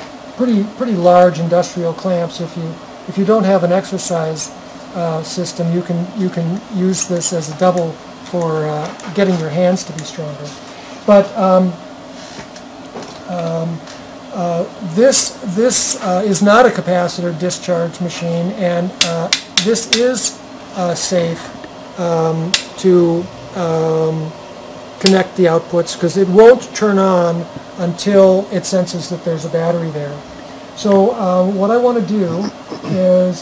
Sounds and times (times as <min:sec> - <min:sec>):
Speech: 0:00.4 - 0:11.8, 0:13.2 - 0:24.4, 0:25.0 - 0:33.4.